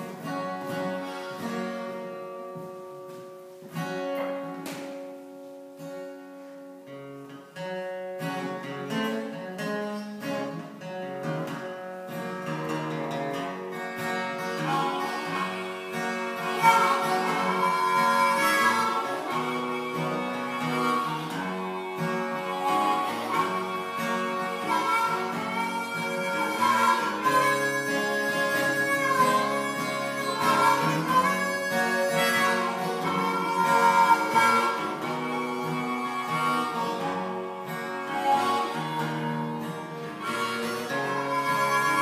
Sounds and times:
Acoustic guitar: 0:00.0 - 0:42.0
Country: 0:00.0 - 0:42.0.

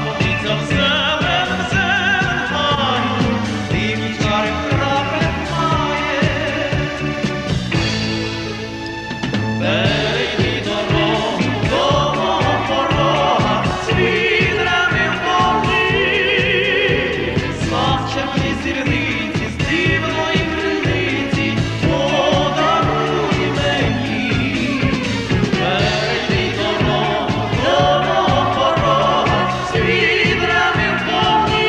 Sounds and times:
Traditional music: 0:00.0 - 0:31.6.

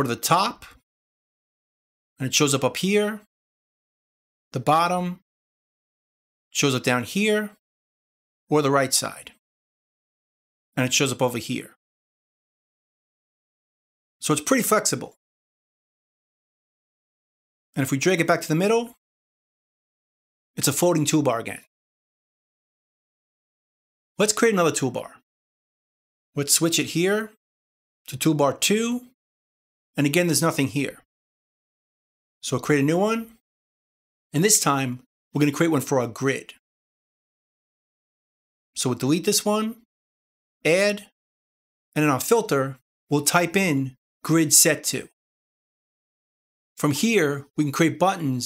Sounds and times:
Speech: 0:00.0 - 0:00.8, 0:02.2 - 0:03.3, 0:04.6 - 0:05.2, 0:06.6 - 0:07.6, 0:08.5 - 0:09.4, 0:10.8 - 0:11.8, 0:14.2 - 0:15.2, 0:17.8 - 0:19.0, 0:20.6 - 0:21.7, 0:24.2 - 0:25.2, 0:26.4 - 0:27.4, 0:28.1 - 0:29.2, 0:30.0 - 0:31.1, 0:32.4 - 0:33.4, 0:34.4 - 0:36.6, 0:38.8 - 0:39.9, 0:40.7 - 0:41.2, 0:42.0 - 0:45.2, 0:46.8 - 0:48.4.

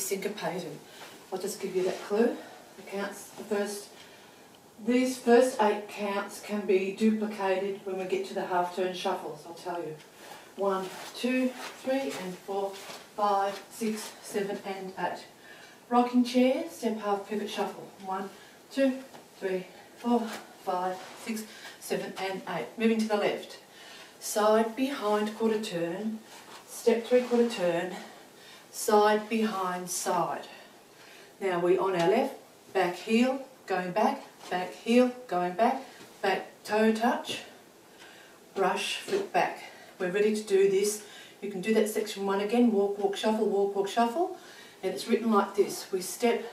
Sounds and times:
Speech: 0:00.0 - 0:03.9, 0:04.8 - 0:15.3, 0:15.9 - 0:23.6, 0:24.2 - 0:28.1, 0:28.7 - 0:30.6, 0:31.4 - 0:37.6, 0:38.6 - 0:46.5.

